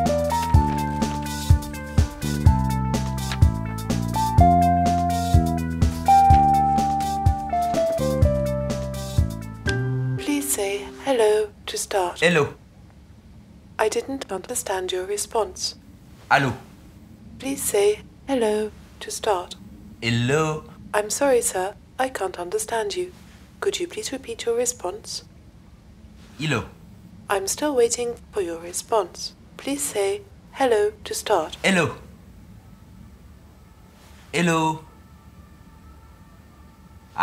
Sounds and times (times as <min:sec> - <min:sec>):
Speech: 0:10.2 - 0:12.6, 0:13.8 - 0:16.6, 0:17.4 - 0:25.3, 0:26.4 - 0:32.0, 0:34.4 - 0:34.9.